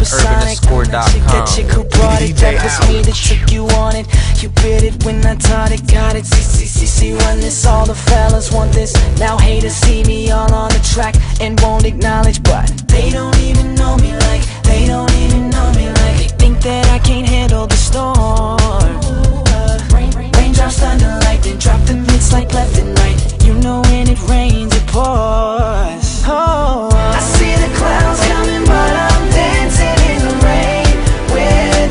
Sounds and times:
Music: 0.0s - 31.9s.

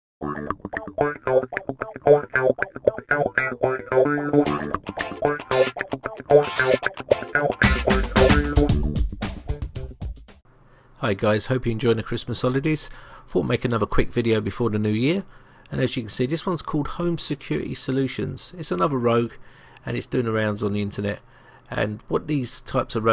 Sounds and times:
Music: 0.2s - 10.4s.

